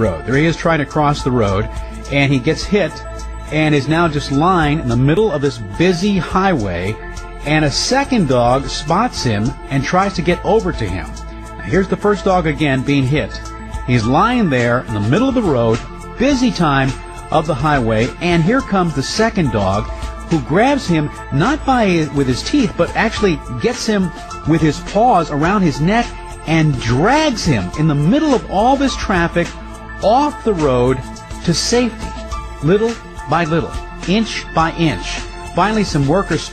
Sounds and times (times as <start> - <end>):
Music: 0.0 - 36.5
Speech: 0.0 - 36.5.